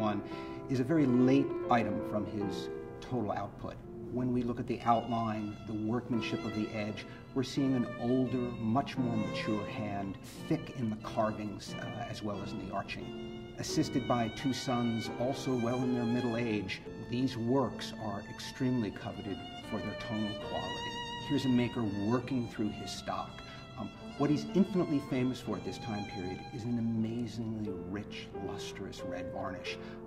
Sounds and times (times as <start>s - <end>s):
Speech: 0.0s - 29.9s.